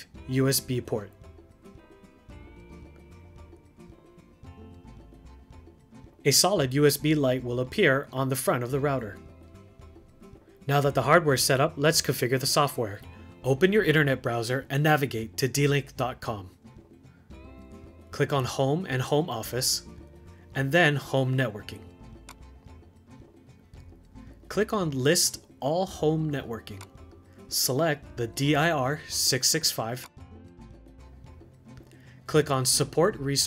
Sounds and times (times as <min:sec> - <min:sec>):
Speech: 0:00.0 - 0:01.2, 0:06.2 - 0:09.2, 0:10.7 - 0:16.6, 0:18.1 - 0:19.9, 0:20.6 - 0:21.9, 0:24.5 - 0:26.9, 0:27.5 - 0:30.1, 0:32.3 - 0:33.4
Music: 0:00.0 - 0:33.4.